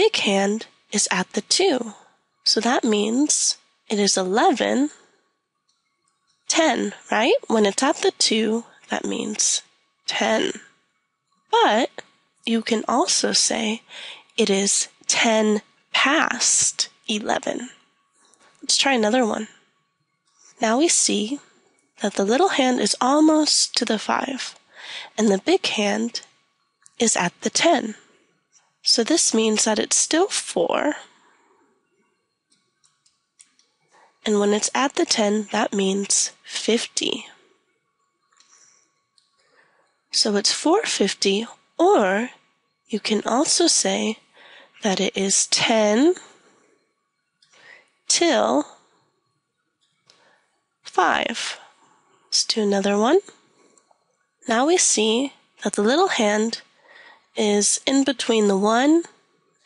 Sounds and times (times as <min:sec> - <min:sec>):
Speech: 0:00.0 - 0:05.0, 0:06.5 - 0:10.6, 0:11.6 - 0:17.7, 0:18.6 - 0:19.5, 0:20.6 - 0:21.4, 0:22.0 - 0:26.2, 0:27.0 - 0:28.0, 0:28.9 - 0:31.0, 0:34.2 - 0:37.3, 0:40.2 - 0:42.3, 0:42.9 - 0:44.2, 0:44.8 - 0:46.2, 0:48.1 - 0:48.7, 0:50.9 - 0:51.7, 0:52.4 - 0:53.3, 0:54.5 - 0:56.6, 0:57.4 - 0:59.1.